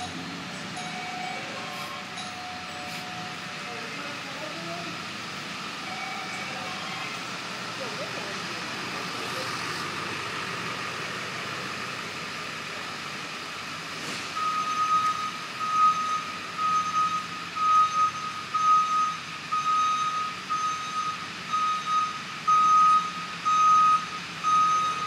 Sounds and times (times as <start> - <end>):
Car: 0.0 - 25.0
Speech: 3.6 - 5.1, 6.2 - 9.8.